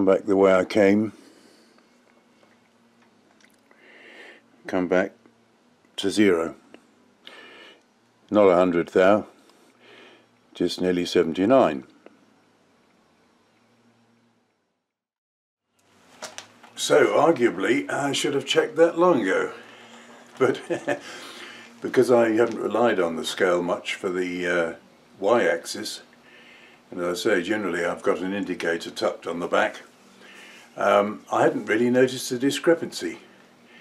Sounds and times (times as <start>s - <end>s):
Speech: 0.0s - 1.2s, 4.7s - 5.2s, 6.0s - 6.6s, 8.3s - 9.4s, 10.6s - 11.9s, 16.8s - 19.6s, 20.4s - 20.8s, 21.8s - 26.1s, 26.9s - 29.9s, 30.8s - 33.3s.